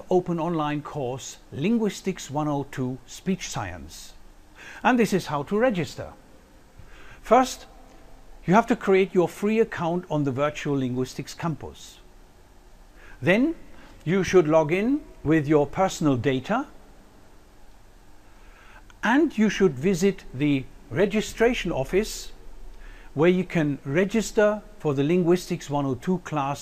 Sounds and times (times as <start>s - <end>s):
Male speech, man speaking: 0.0s - 4.2s, 4.8s - 6.2s, 7.3s - 7.7s, 8.5s - 12.0s, 13.2s - 16.7s, 19.0s - 22.4s, 23.2s - 26.6s
Narration, monologue: 0.0s - 26.6s.